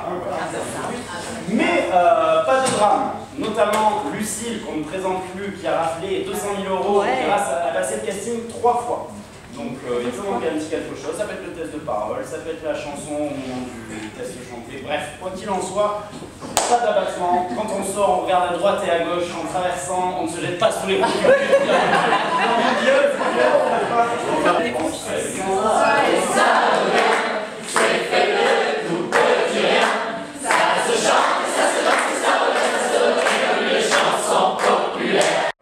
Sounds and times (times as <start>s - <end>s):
Speech: 0.0s - 21.5s, 22.4s - 26.4s.